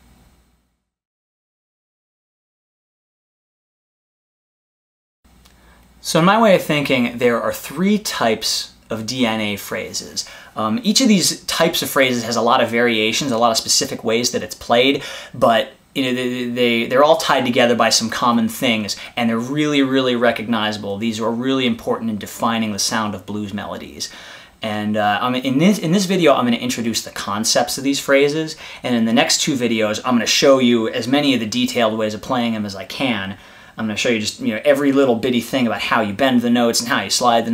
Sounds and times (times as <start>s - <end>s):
Speech: 6.0s - 37.5s.